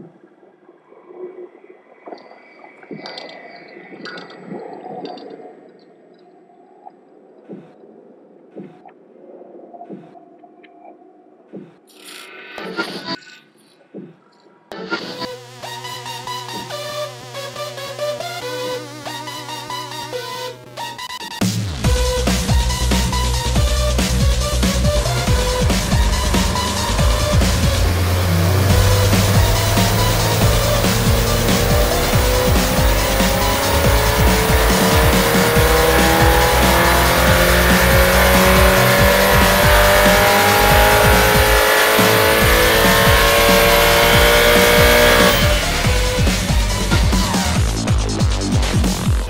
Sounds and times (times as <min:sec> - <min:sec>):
Music: 0:12.1 - 0:13.2, 0:14.7 - 0:49.2
Medium engine (mid frequency): 0:22.1 - 0:48.4
Accelerating, revving, vroom: 0:24.7 - 0:46.5.